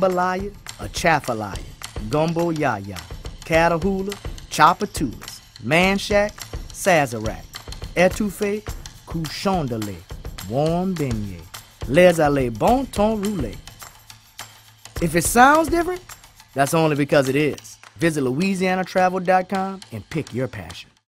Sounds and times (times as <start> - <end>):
Speech: 0.0 - 13.6, 15.0 - 16.0, 16.6 - 21.0
Music: 0.0 - 21.1.